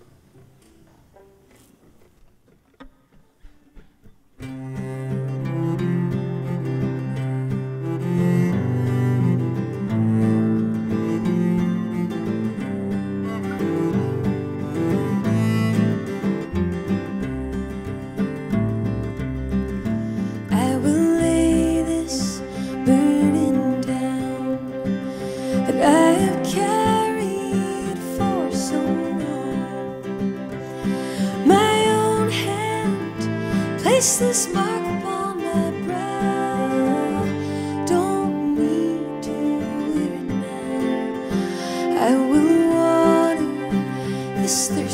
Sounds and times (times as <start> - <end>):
Music: 0.0 - 44.9.